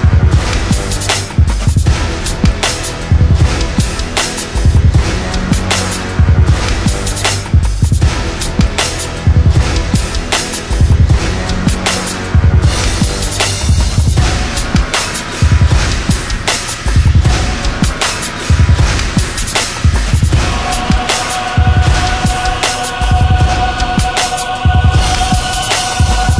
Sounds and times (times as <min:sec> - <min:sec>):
Music: 0:00.0 - 0:26.4.